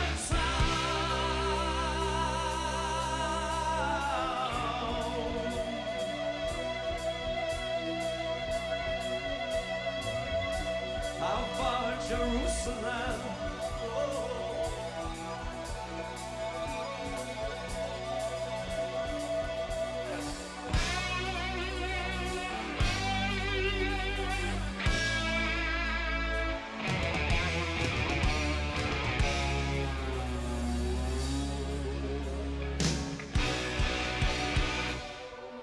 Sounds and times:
Singing: 0:00.0 - 0:06.6, 0:11.2 - 0:15.7
Rock and roll: 0:00.0 - 0:35.6.

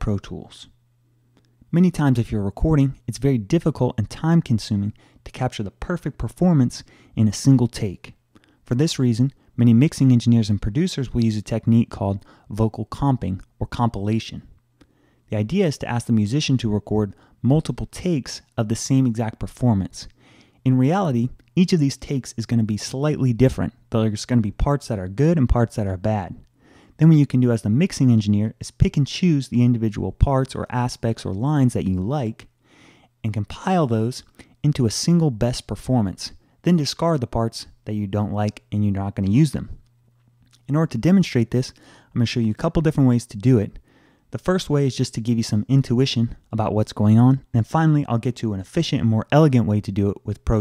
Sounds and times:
Speech: 0:00.0 - 0:00.8, 0:01.7 - 0:14.6, 0:15.3 - 0:32.5, 0:33.2 - 0:39.8, 0:40.6 - 0:50.6.

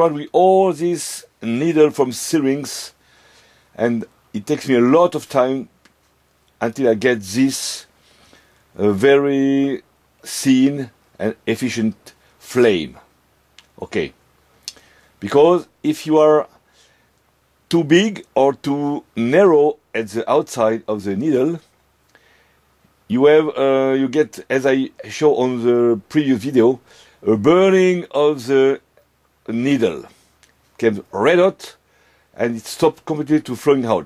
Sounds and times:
Speech: 0:00.0 - 0:03.0, 0:03.8 - 0:05.7, 0:06.6 - 0:07.9, 0:08.8 - 0:14.2, 0:15.2 - 0:16.6, 0:17.7 - 0:21.7, 0:23.1 - 0:30.2, 0:30.8 - 0:31.8, 0:32.4 - 0:34.0.

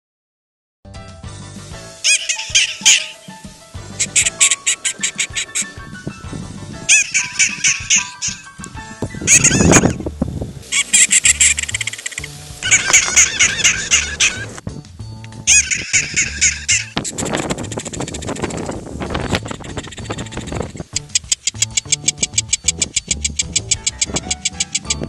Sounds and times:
Music: 0:00.9 - 0:25.0
Animal: 0:04.0 - 0:05.8, 0:06.9 - 0:08.4, 0:10.7 - 0:14.5.

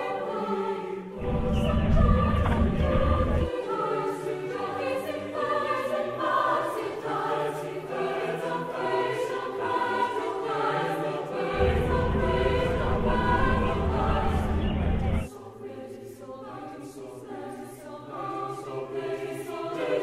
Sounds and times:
Music: 0:00.0 - 0:20.0.

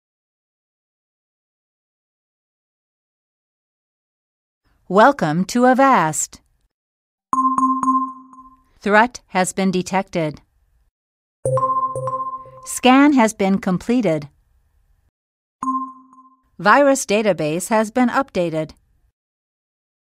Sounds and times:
Speech: 0:04.9 - 0:06.4, 0:08.8 - 0:10.5, 0:12.7 - 0:14.4, 0:16.6 - 0:18.8.

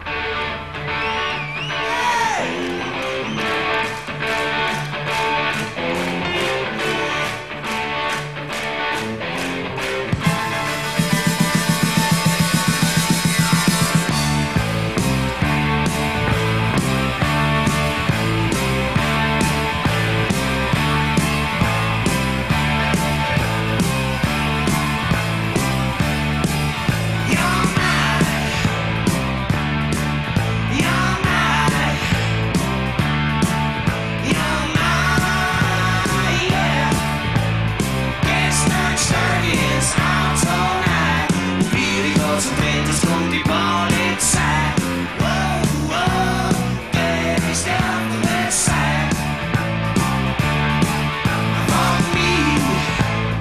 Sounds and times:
Music: 0:00.0 - 0:53.4.

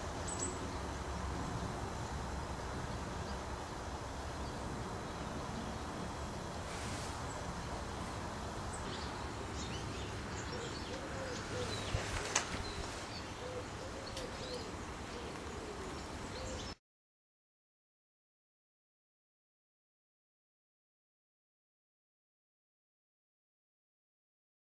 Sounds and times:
Outside, rural or natural: 0:00.0 - 0:16.8
Bird: 0:08.7 - 0:16.8.

